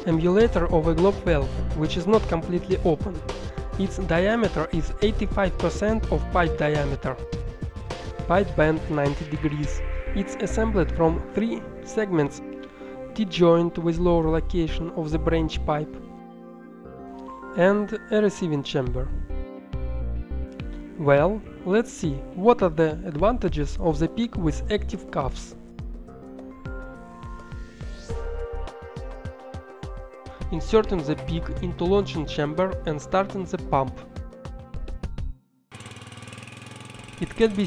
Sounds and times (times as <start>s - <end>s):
Speech: 0.0s - 3.2s, 3.8s - 7.2s, 8.3s - 12.4s, 13.2s - 16.0s, 17.6s - 19.2s, 21.0s - 25.6s, 30.5s - 34.0s, 37.2s - 37.6s
Music: 0.0s - 37.6s.